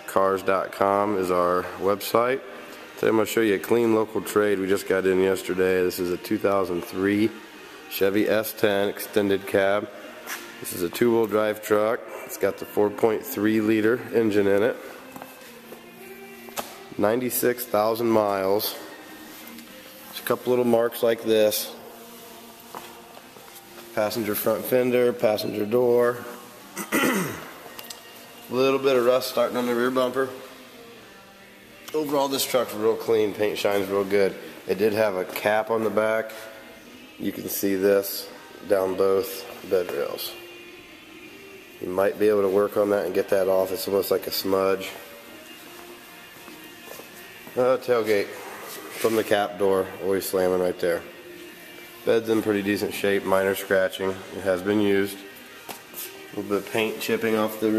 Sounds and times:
Music: 0.0 - 57.7
Speech: 20.2 - 21.8, 24.0 - 26.3, 28.5 - 30.4, 31.9 - 36.4, 41.8 - 45.0, 47.6 - 48.4, 49.0 - 51.1, 52.1 - 55.2, 56.4 - 57.7.

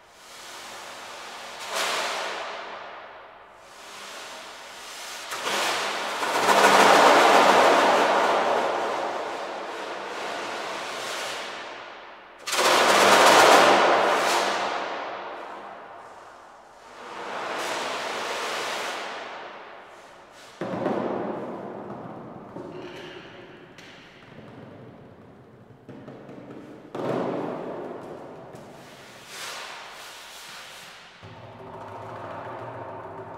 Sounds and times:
Inside, large room or hall: 0.0 - 33.3.

